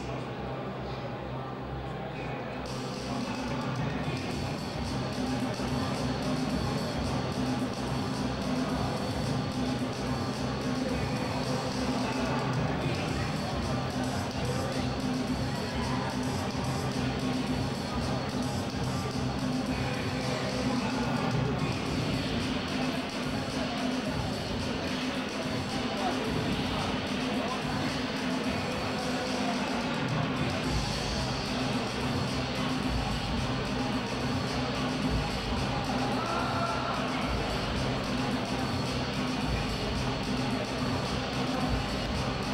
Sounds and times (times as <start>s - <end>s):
Inside, large room or hall: 0.0s - 42.5s
Music: 0.0s - 42.5s.